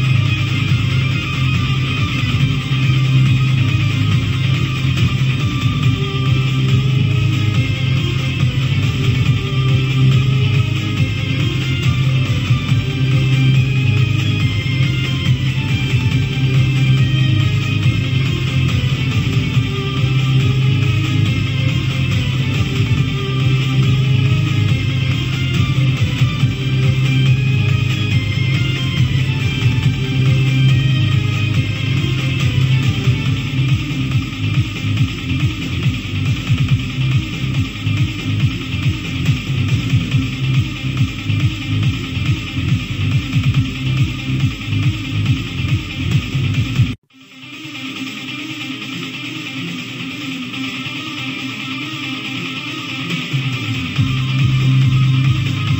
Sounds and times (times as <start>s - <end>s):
Music: 0.0s - 55.7s.